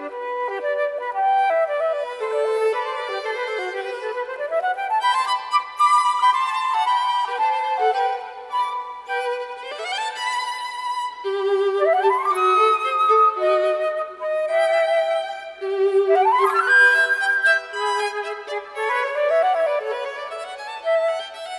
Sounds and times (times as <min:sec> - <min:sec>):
Flute: 0:00.0 - 0:21.5
Violin, fiddle: 0:00.0 - 0:21.5.